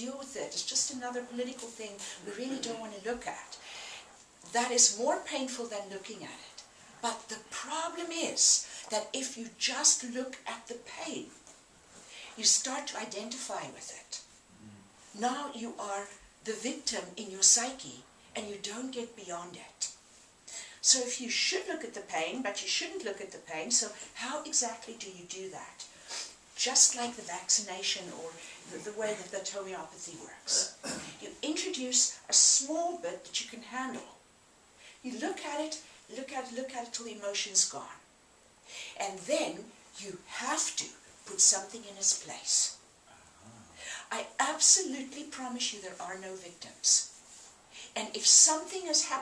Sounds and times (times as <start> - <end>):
Speech: 0.0 - 3.6, 4.4 - 11.4, 12.4 - 20.0, 20.8 - 25.9, 26.6 - 34.2, 35.0 - 38.1, 39.0 - 47.1, 48.0 - 49.2.